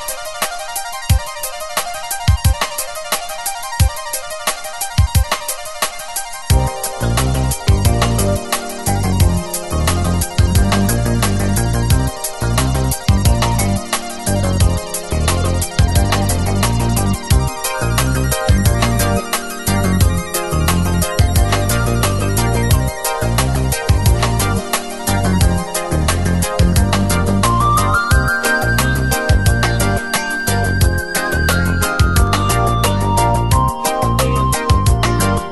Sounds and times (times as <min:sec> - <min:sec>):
Music: 0:00.0 - 0:35.5.